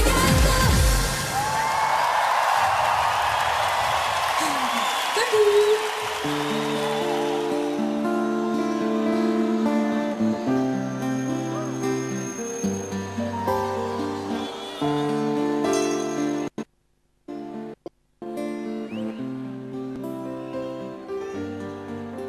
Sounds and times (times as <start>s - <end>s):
Music: 0.0s - 1.4s, 6.0s - 16.6s, 17.3s - 22.2s.